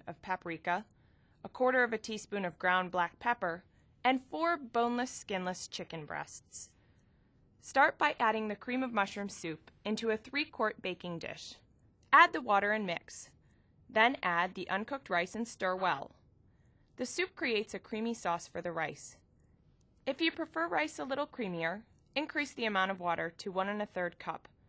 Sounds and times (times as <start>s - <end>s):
Speech: 0.0s - 0.9s, 1.5s - 6.8s, 7.6s - 16.2s, 17.0s - 19.2s, 20.1s - 24.5s.